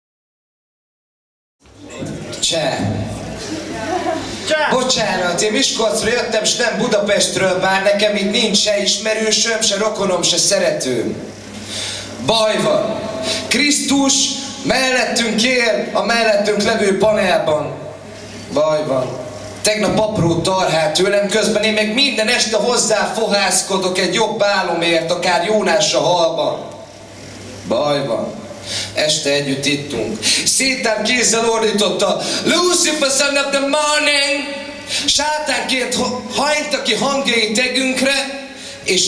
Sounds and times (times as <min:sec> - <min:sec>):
Speech: 0:01.9 - 0:03.1, 0:03.7 - 0:11.2, 0:12.2 - 0:17.9, 0:18.5 - 0:26.7, 0:27.6 - 0:28.4, 0:29.0 - 0:39.0.